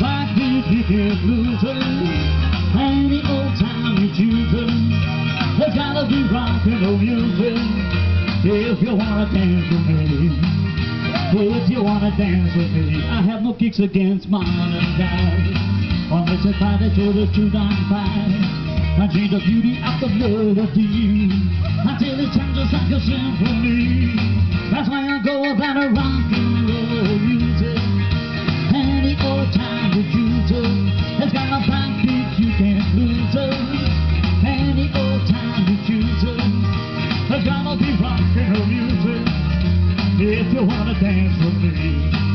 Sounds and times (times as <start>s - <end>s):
Rock and roll: 0.0s - 42.3s.